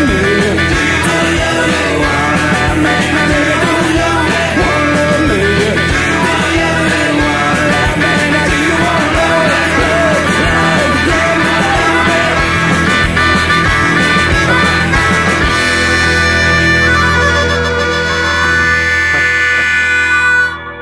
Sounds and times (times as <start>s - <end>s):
Rock and roll: 0.0s - 20.8s.